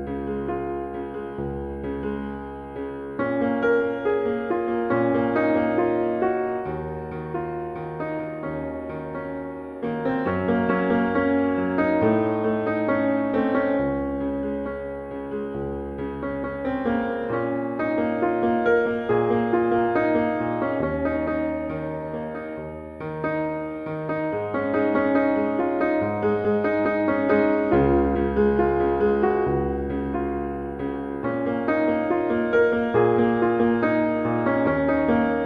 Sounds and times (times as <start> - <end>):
Piano: 0.0 - 35.4.